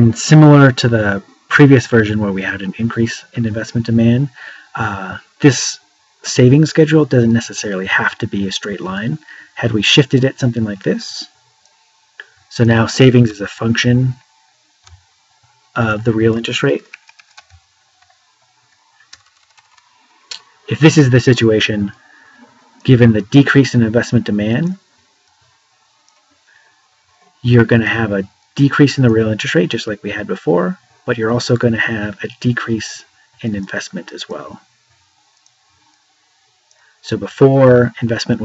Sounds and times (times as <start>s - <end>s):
Speech: 0.0s - 11.3s, 12.5s - 14.2s, 15.8s - 16.9s, 20.7s - 22.0s, 22.8s - 24.8s, 27.4s - 34.6s, 37.0s - 38.4s
Inside, small room: 0.0s - 38.4s.